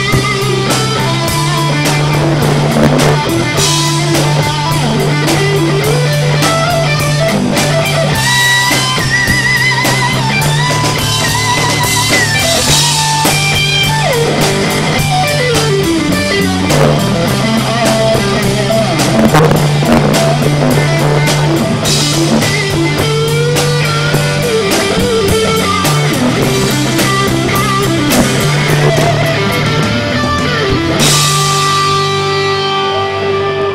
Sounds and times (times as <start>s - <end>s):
Strum: 0.0s - 33.7s.